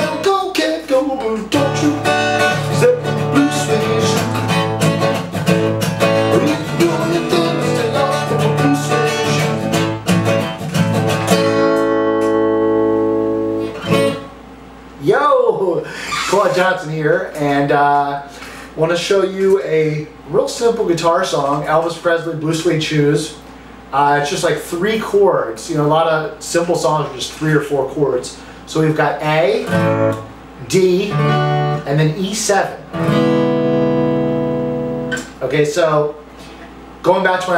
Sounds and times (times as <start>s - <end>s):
Acoustic guitar: 0.0s - 14.4s, 16.0s - 18.7s, 29.6s - 35.5s
Speech: 15.0s - 29.8s, 30.6s - 32.9s, 35.4s - 36.2s, 37.0s - 37.5s.